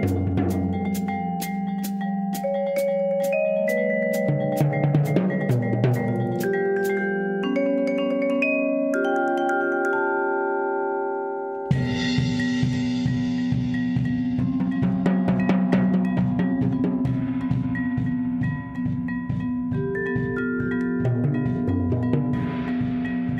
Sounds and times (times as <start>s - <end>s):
Drum: 0.0s - 7.1s, 11.7s - 23.3s
Drum kit: 0.0s - 7.1s, 11.7s - 23.3s
Cymbal: 0.0s - 7.5s, 11.7s - 23.3s.